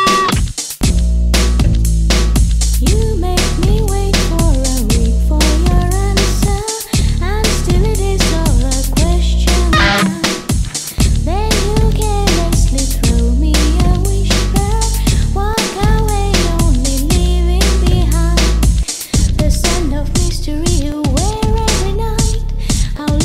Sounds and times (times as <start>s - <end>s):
Music: 0.0s - 23.2s.